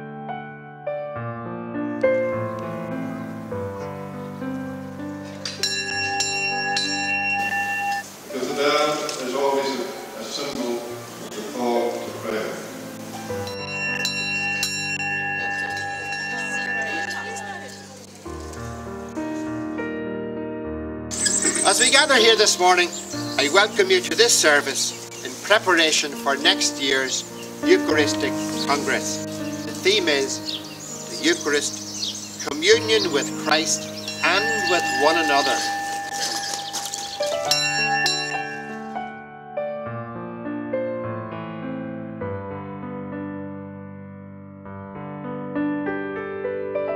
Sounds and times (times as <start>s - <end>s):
Music: 0.0s - 46.9s
Speech: 8.3s - 12.7s, 21.6s - 30.4s, 31.1s - 31.7s, 32.5s - 35.7s.